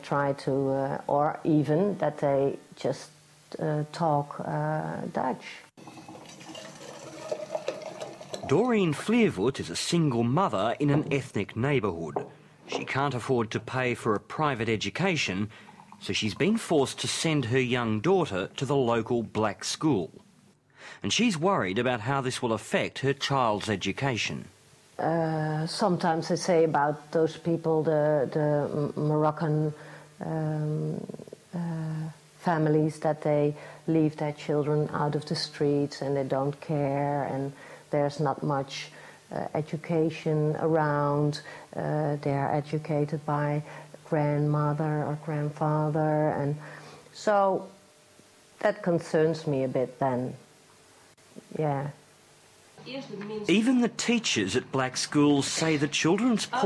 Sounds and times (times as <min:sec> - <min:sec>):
Speech: 0:00.0 - 0:05.7, 0:08.5 - 0:20.2, 0:21.0 - 0:46.6, 0:48.6 - 0:50.4, 0:52.9 - 0:56.6
Water tap, faucet: 0:05.8 - 0:09.0, 0:15.6 - 0:16.7.